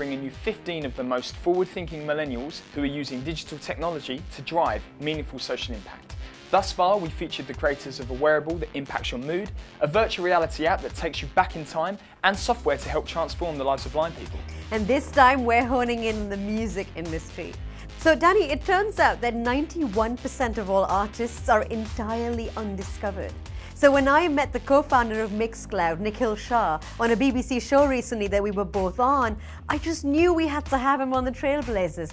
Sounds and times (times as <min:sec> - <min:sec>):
Music: 0:00.0 - 0:32.1
Speech: 0:00.0 - 0:32.1.